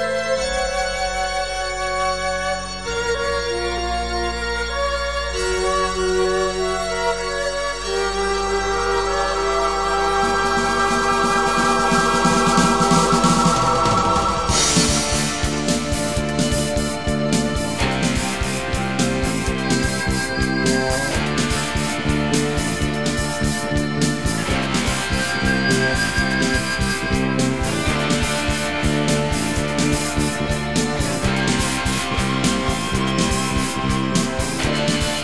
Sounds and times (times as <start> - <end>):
Progressive rock: 0.0 - 35.2.